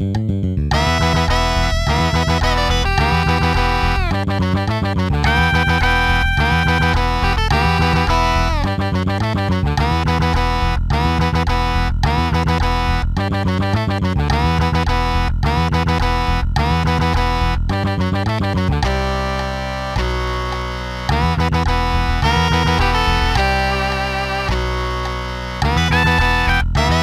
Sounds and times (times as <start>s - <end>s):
Bass guitar: 0.0s - 27.0s.